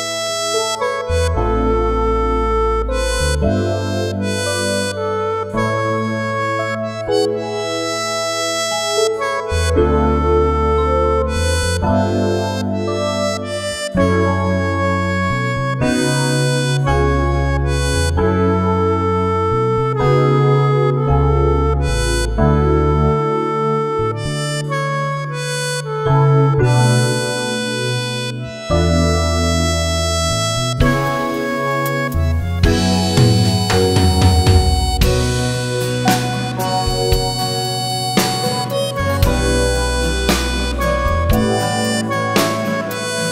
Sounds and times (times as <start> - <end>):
Harmonica: 0.0 - 43.3
Wind instrument, woodwind instrument: 0.0 - 43.3.